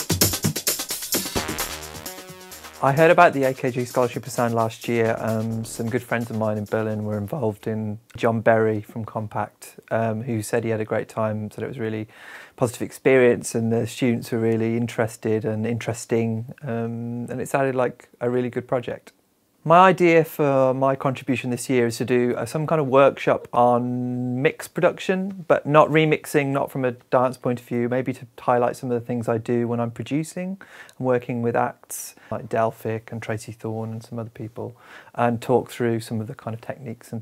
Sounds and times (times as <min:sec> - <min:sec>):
Speech: 0:02.8 - 0:37.2.